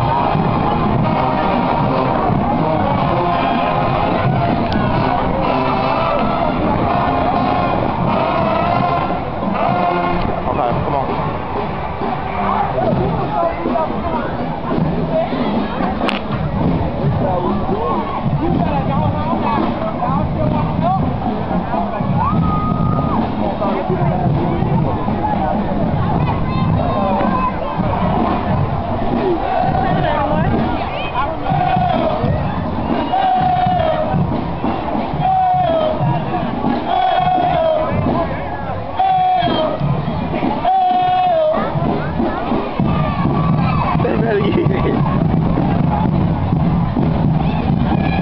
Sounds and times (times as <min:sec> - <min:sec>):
Speech: 0:00.0 - 0:46.5, 0:47.3 - 0:48.2
Music: 0:00.0 - 0:48.2.